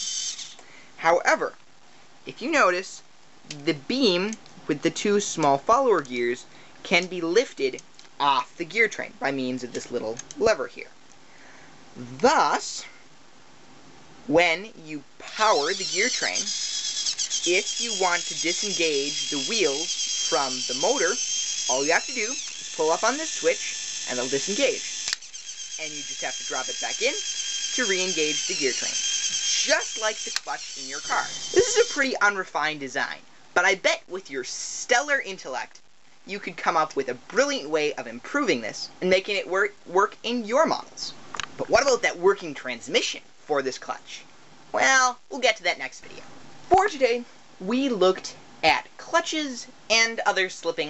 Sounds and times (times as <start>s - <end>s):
Ratchet, pawl: 0.0s - 0.6s, 15.3s - 32.1s.